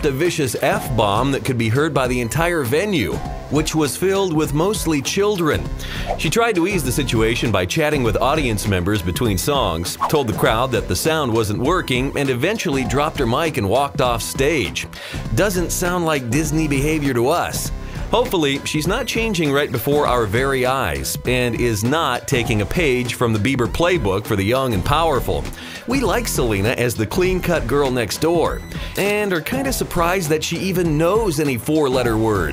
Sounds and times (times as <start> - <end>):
Music: 0.0 - 32.5
Speech: 0.0 - 32.5.